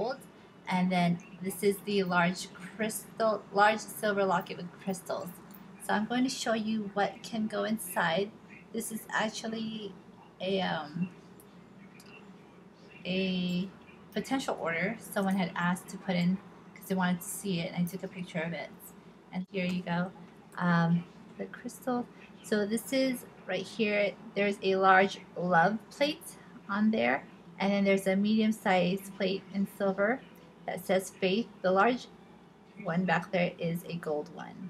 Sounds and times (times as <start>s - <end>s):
Speech: 0.0s - 11.1s, 13.0s - 32.1s, 32.8s - 34.6s.